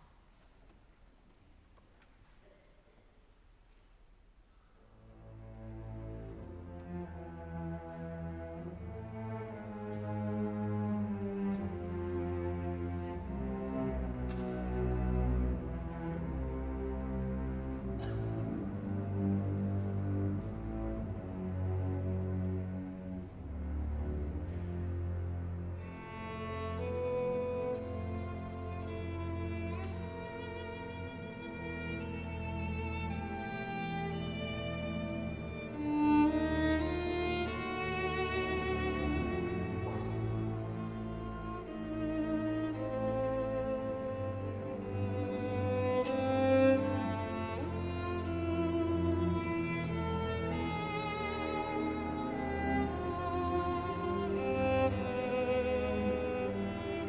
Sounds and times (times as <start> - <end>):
Violin, fiddle: 4.9 - 57.0.